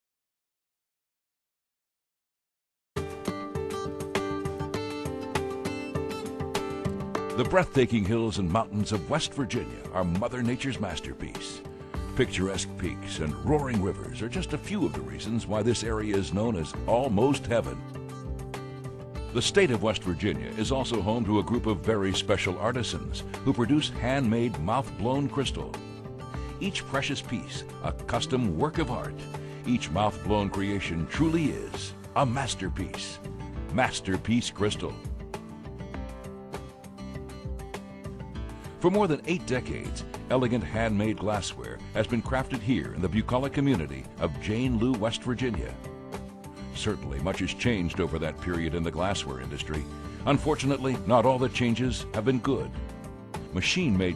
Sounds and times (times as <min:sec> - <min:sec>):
Music: 0:03.0 - 0:54.1
Speech: 0:07.4 - 0:11.6, 0:12.2 - 0:17.8, 0:19.4 - 0:25.8, 0:26.6 - 0:35.0, 0:38.8 - 0:45.8, 0:46.8 - 0:52.8, 0:53.5 - 0:54.1.